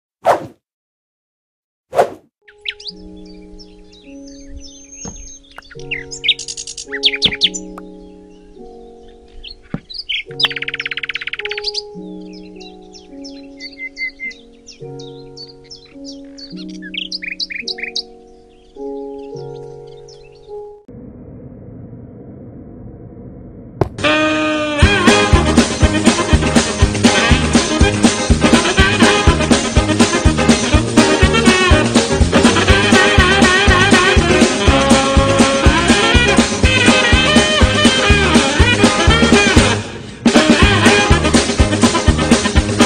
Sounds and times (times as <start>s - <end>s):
Outside, rural or natural: 1.9s - 42.8s
Music: 2.4s - 20.9s, 24.0s - 42.8s.